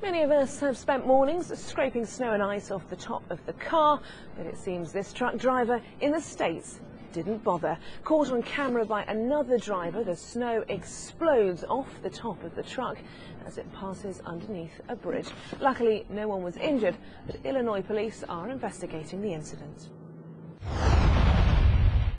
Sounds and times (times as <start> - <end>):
Speech: 0.0 - 19.9.